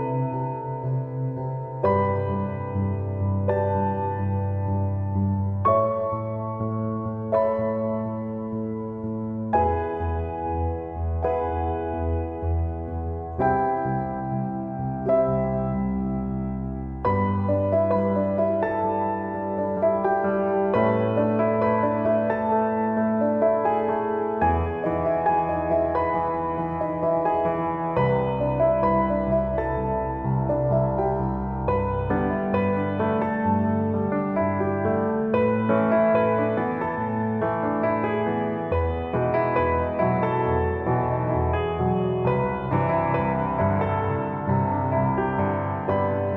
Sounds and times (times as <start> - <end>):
Music: 0.0 - 46.3.